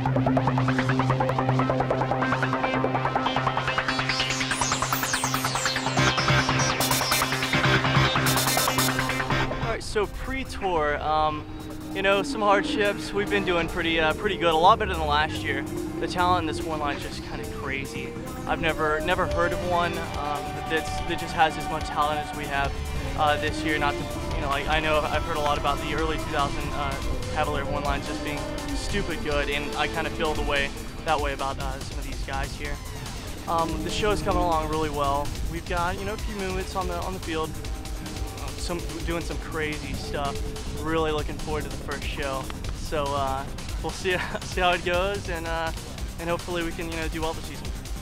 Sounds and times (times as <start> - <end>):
Music: 0.0 - 48.0
Speech: 9.6 - 32.8, 33.5 - 37.5, 38.4 - 47.6.